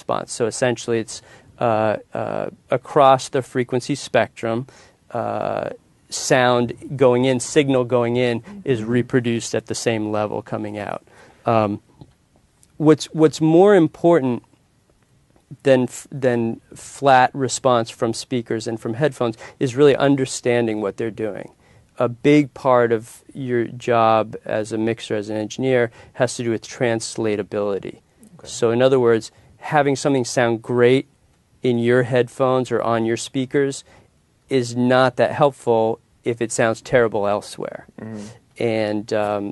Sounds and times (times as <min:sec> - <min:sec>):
Speech: 0:00.0 - 0:11.8, 0:12.8 - 0:14.5, 0:15.5 - 0:33.8, 0:34.5 - 0:39.5.